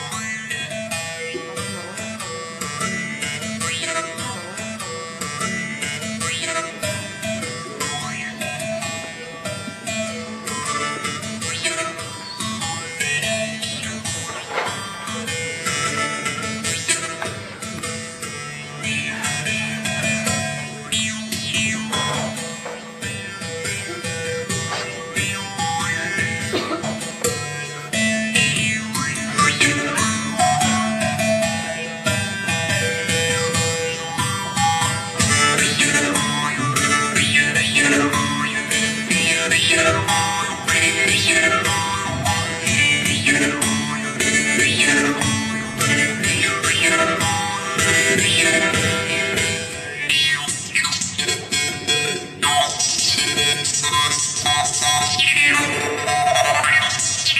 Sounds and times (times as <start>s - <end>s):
Music: 0.0s - 57.3s.